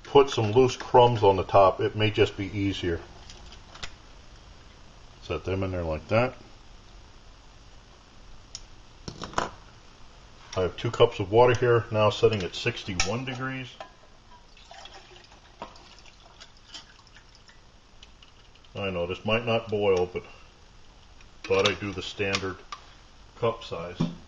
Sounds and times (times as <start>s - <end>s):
Speech: 0.0s - 3.1s, 5.2s - 6.4s, 10.6s - 13.8s, 18.8s - 20.4s, 21.5s - 22.7s, 23.4s - 24.2s.